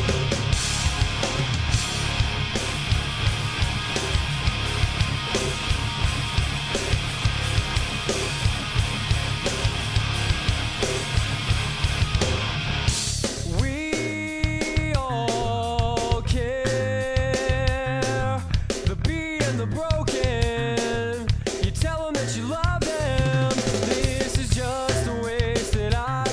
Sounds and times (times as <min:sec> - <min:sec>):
Music: 0:00.0 - 0:26.3.